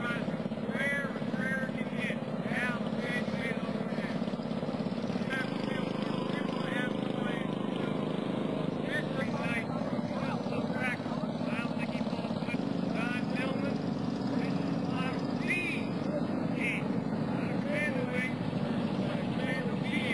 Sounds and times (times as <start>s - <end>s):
Speech: 0.0s - 4.4s, 5.2s - 20.1s.